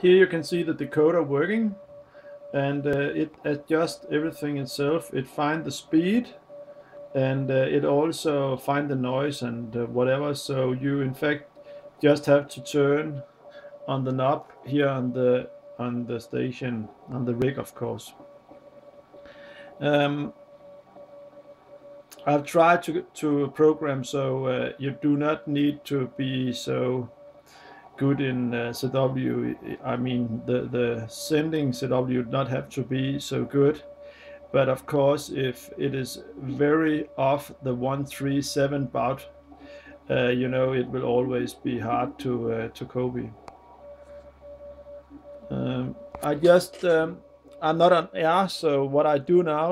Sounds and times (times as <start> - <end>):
Speech: 0.0 - 1.8, 2.6 - 6.4, 7.2 - 11.4, 12.0 - 13.2, 13.9 - 18.2, 19.8 - 20.3, 22.2 - 27.1, 28.0 - 33.8, 34.6 - 39.3, 40.1 - 43.4, 45.5 - 49.7
Radio: 0.0 - 49.7.